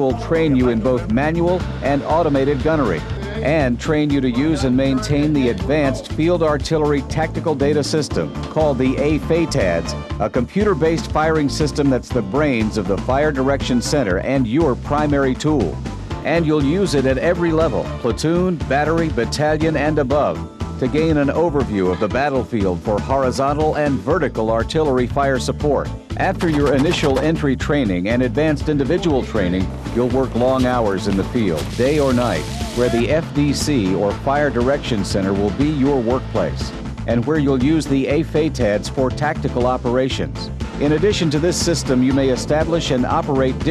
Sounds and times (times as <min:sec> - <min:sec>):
Music: 0:00.0 - 0:43.7
Speech: 0:00.0 - 0:43.7.